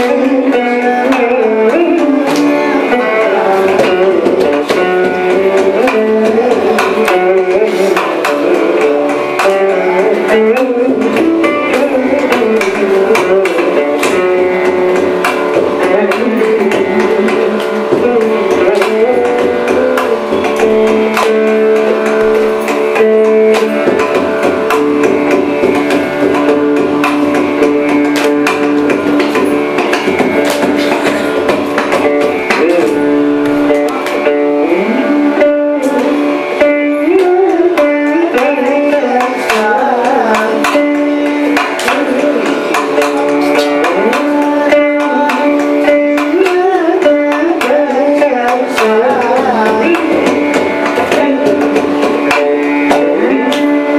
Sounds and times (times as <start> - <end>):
Carnatic music: 0.0 - 53.9
Tabla: 0.0 - 53.9.